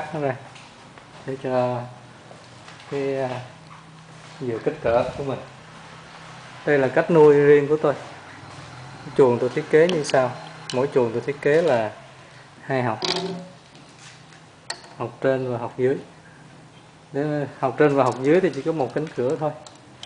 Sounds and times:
Speech: 1.2s - 2.0s, 4.4s - 5.5s.

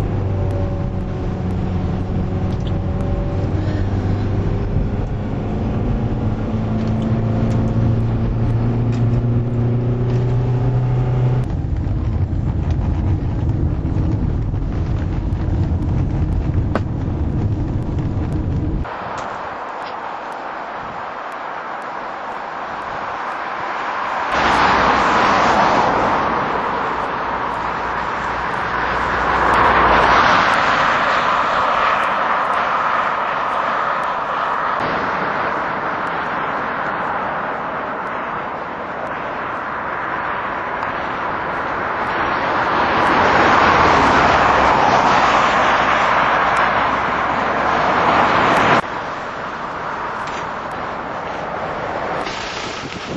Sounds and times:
Outside, rural or natural: 0.0s - 53.1s
Vehicle: 0.0s - 53.1s.

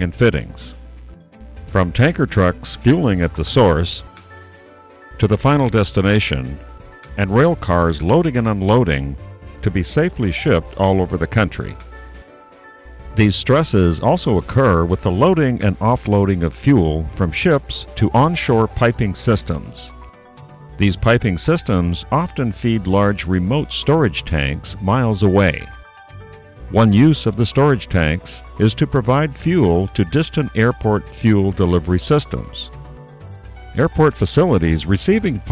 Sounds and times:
Speech: 0.0s - 0.8s, 1.7s - 4.1s, 5.2s - 6.6s, 7.2s - 11.8s, 13.2s - 19.9s, 20.8s - 25.8s, 26.7s - 32.7s, 33.8s - 35.5s
Music: 0.0s - 35.5s.

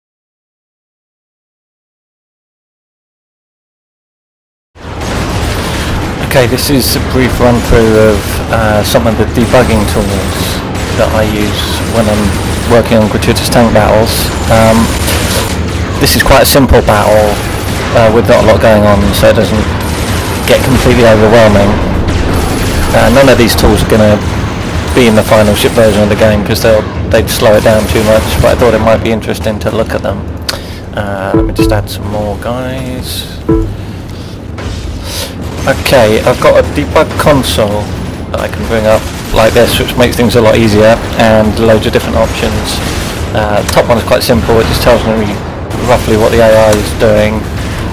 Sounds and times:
Speech: 6.2s - 15.0s, 16.0s - 19.7s, 20.5s - 21.8s, 22.9s - 24.3s, 24.9s - 30.2s, 30.9s - 33.5s, 35.2s - 47.5s
Music: 31.4s - 31.9s, 33.5s - 33.8s.

